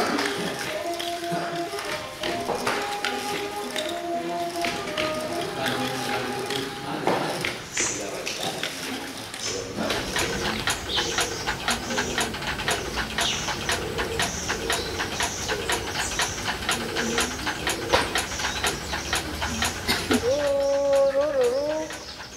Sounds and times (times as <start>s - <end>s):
Coo: 16.7s - 18.2s.